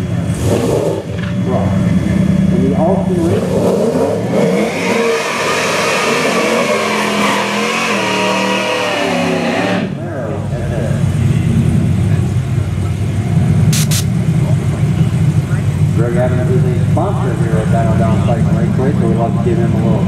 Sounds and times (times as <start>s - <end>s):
Speech: 1.4s - 3.5s, 10.0s - 13.2s, 14.4s - 20.0s.